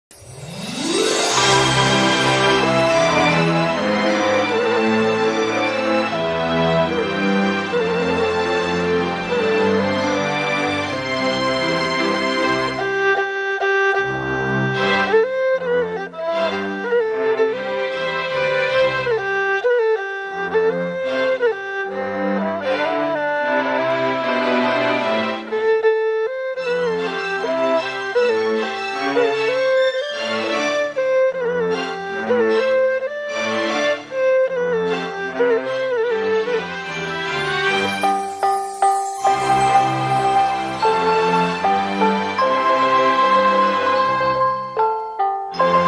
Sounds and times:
Theme music: 0.1s - 12.9s, 36.6s - 45.8s.

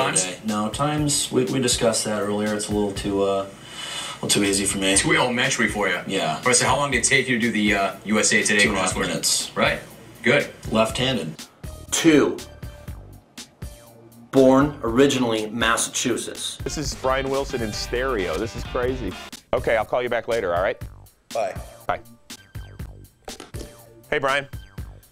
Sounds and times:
Speech: 0.0s - 3.5s, 4.2s - 12.5s, 14.4s - 20.8s, 24.1s - 24.5s
Music: 0.0s - 25.1s.

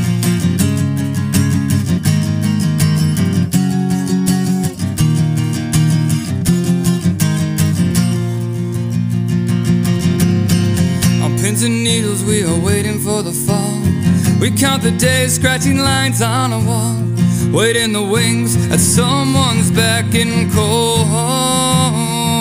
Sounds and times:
Music: 0.0s - 22.4s.

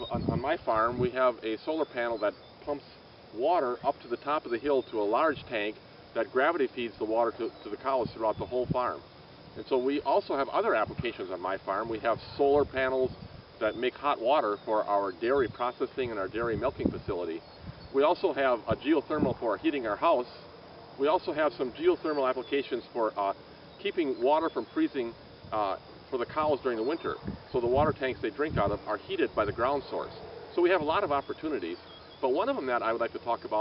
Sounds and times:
Speech: 0.0s - 9.0s, 9.6s - 17.4s, 18.0s - 20.4s, 21.0s - 33.6s.

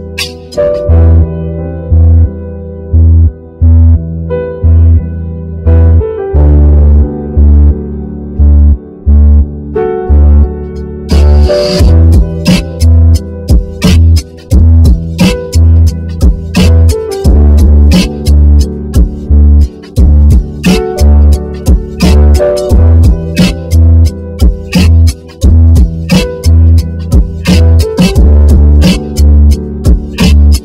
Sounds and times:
Music: 0.0s - 30.6s.

